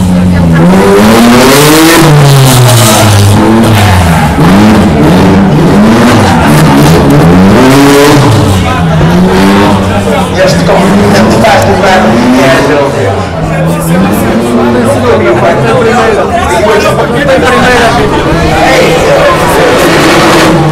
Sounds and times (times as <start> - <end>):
Speech: 0.0 - 0.8, 8.4 - 20.4
Accelerating, revving, vroom: 0.0 - 12.9, 18.6 - 20.7
Car: 0.0 - 20.7.